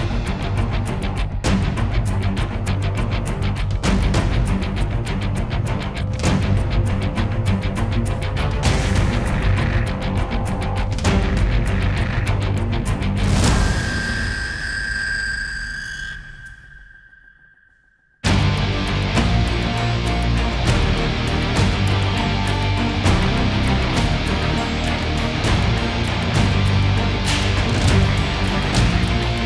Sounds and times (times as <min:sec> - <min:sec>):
Music: 0:00.0 - 0:16.8, 0:17.7 - 0:29.4.